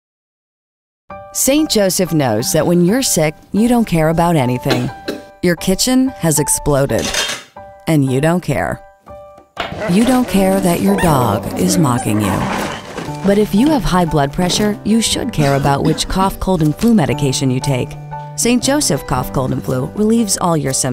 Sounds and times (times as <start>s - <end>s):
Music: 1.1s - 20.9s
Speech: 1.4s - 7.1s, 7.9s - 8.8s, 9.8s - 12.6s, 13.2s - 20.9s
Cough: 4.7s - 5.3s, 15.3s - 16.2s.